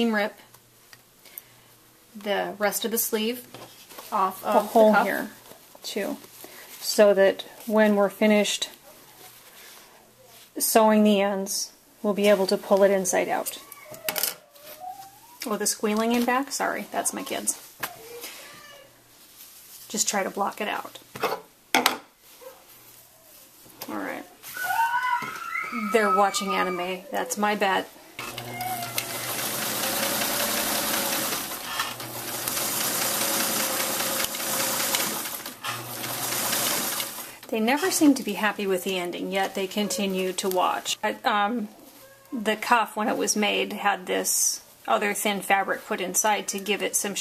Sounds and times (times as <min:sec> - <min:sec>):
Speech: 0:00.0 - 0:00.4, 0:02.2 - 0:03.5, 0:04.1 - 0:06.2, 0:06.8 - 0:08.8, 0:10.6 - 0:13.8, 0:15.4 - 0:17.6, 0:19.9 - 0:21.0, 0:23.8 - 0:24.8, 0:25.7 - 0:27.9, 0:37.5 - 0:47.2.